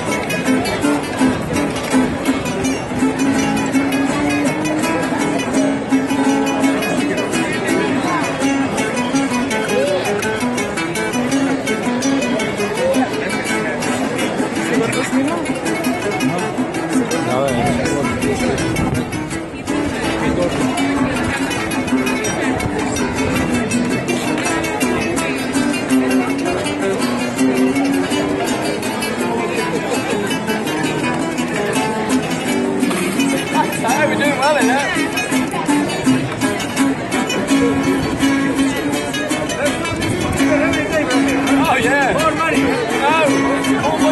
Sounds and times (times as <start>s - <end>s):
Music: 0.0s - 44.1s
Speech: 0.0s - 44.1s.